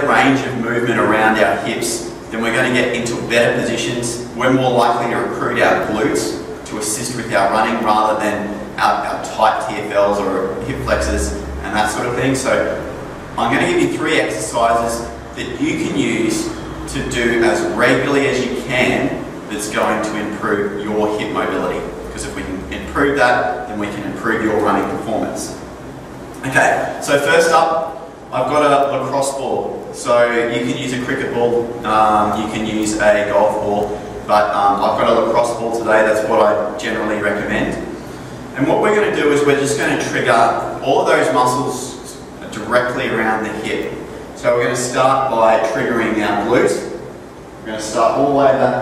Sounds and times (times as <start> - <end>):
Speech: 0.0 - 25.7, 26.4 - 47.0, 47.6 - 48.8
Inside, large room or hall: 0.0 - 48.8.